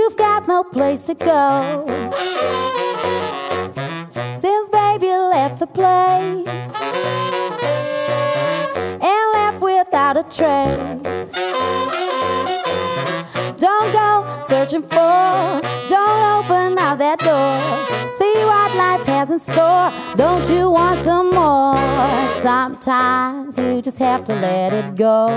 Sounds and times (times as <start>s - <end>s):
Music: 0.0s - 25.3s.